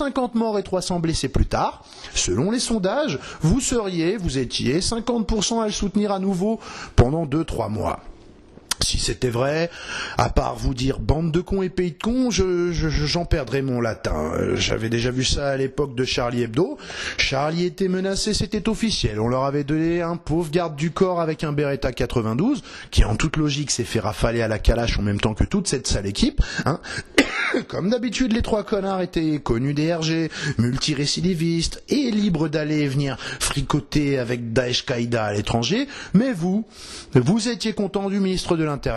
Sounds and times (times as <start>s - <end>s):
Speech: 0.0s - 8.1s, 8.7s - 26.9s, 27.6s - 38.9s.